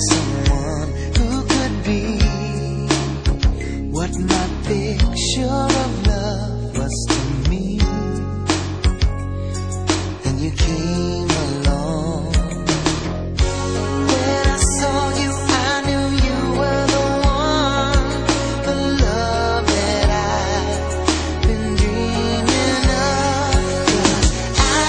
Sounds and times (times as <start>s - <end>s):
Music: 0.0s - 24.8s.